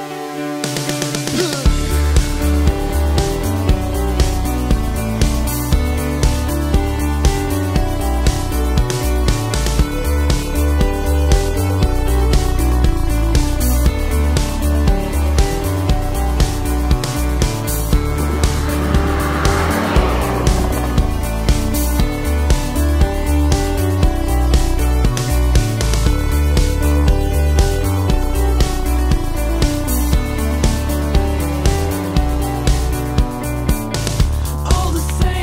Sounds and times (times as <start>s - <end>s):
Music: 0.0s - 35.4s
Car passing by: 16.7s - 23.5s.